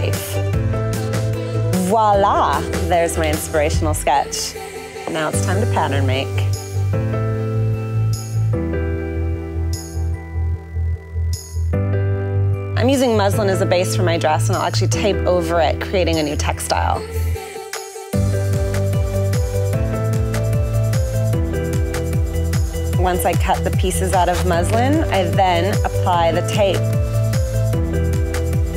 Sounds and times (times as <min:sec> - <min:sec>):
Music: 0:00.0 - 0:28.7
Speech: 0:01.8 - 0:06.5, 0:12.8 - 0:17.0, 0:23.0 - 0:26.9.